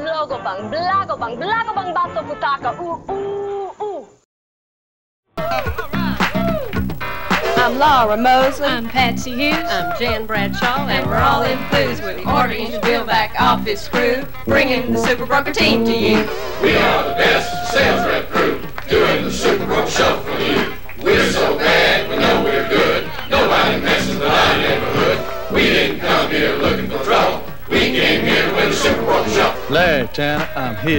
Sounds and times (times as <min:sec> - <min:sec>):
Music: 0:00.0 - 0:04.0, 0:05.4 - 0:30.9.